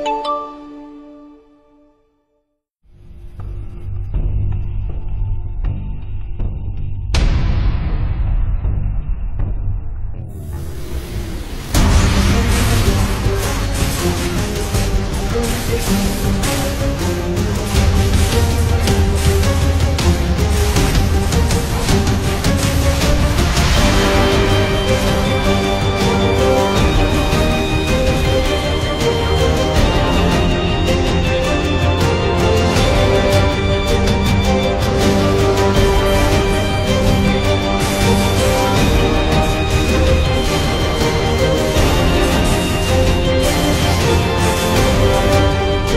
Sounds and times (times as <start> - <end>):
Music: 0.0 - 45.9.